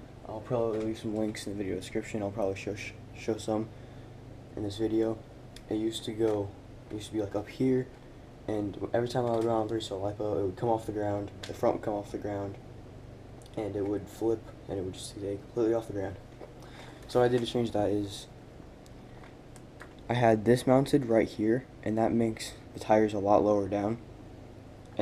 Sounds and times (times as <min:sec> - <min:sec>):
Speech: 0:00.2 - 0:03.7, 0:04.6 - 0:07.9, 0:08.5 - 0:12.6, 0:13.5 - 0:16.2, 0:17.1 - 0:18.4, 0:20.0 - 0:24.0.